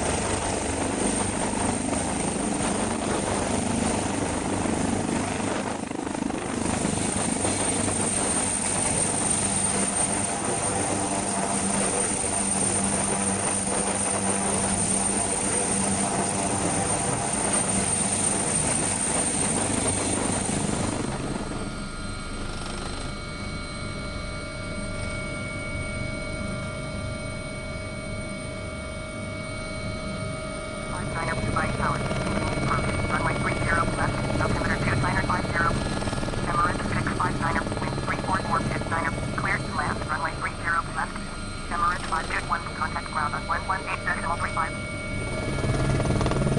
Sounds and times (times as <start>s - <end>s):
Helicopter: 0.0s - 46.5s.